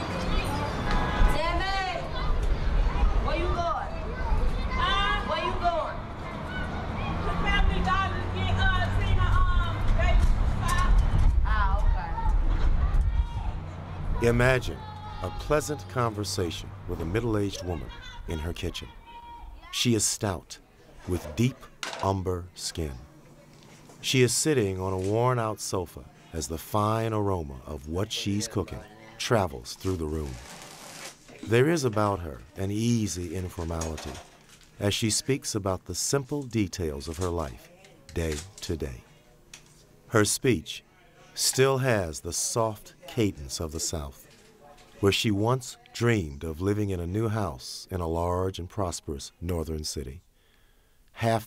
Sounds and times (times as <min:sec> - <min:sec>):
Speech: 0:31.4 - 0:39.0.